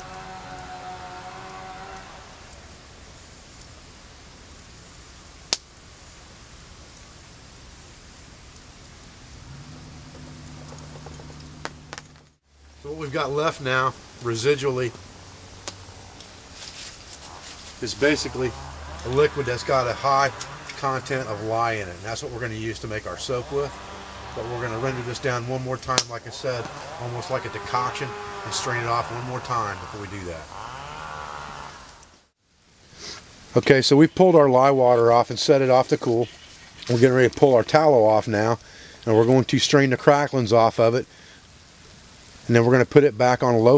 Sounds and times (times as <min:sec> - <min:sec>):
Speech: 0:12.8 - 0:15.0, 0:17.8 - 0:23.8, 0:24.4 - 0:30.5, 0:33.5 - 0:36.3, 0:36.9 - 0:41.1, 0:42.5 - 0:43.7.